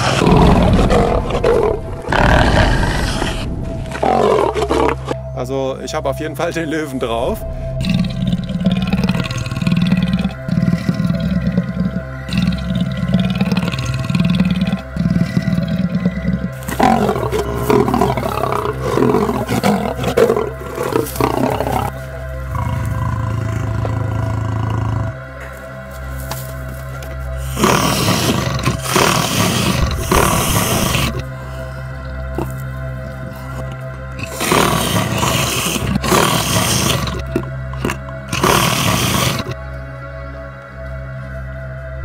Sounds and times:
Roar: 0:00.0 - 0:05.2, 0:07.8 - 0:25.5, 0:27.4 - 0:31.5, 0:32.3 - 0:39.6
Music: 0:00.0 - 0:42.0.

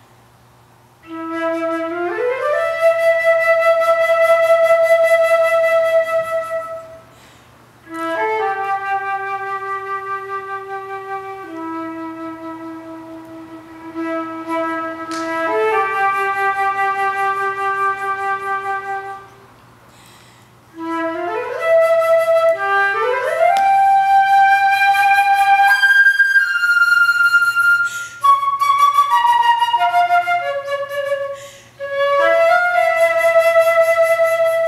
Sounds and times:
Flute: 0:01.0 - 0:07.1, 0:07.9 - 0:19.5, 0:20.8 - 0:34.6.

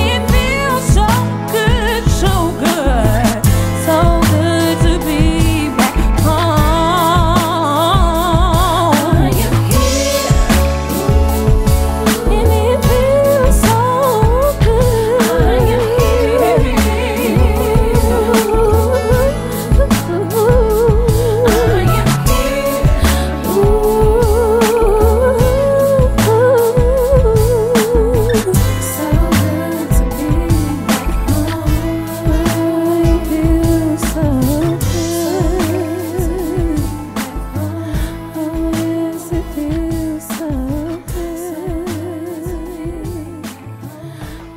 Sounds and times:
Music: 0:00.0 - 0:44.5.

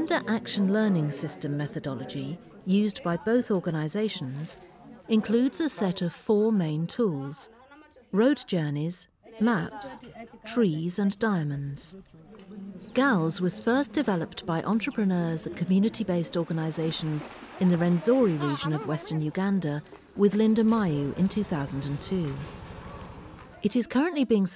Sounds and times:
Speech: 0:00.0 - 0:12.0, 0:13.0 - 0:22.5, 0:23.6 - 0:24.5.

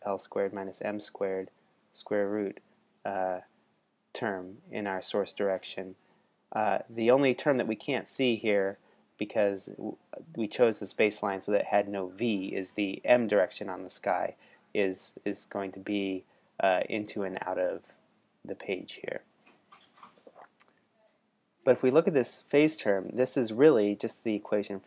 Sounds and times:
Speech: 0:00.0 - 0:03.5, 0:04.2 - 0:06.0, 0:06.6 - 0:19.3, 0:21.6 - 0:24.8.

